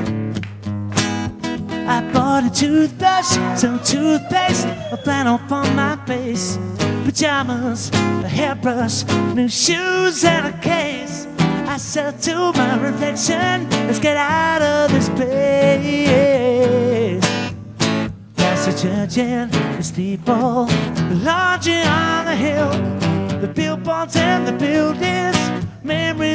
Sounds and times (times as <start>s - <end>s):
Singing: 1.9s - 17.2s.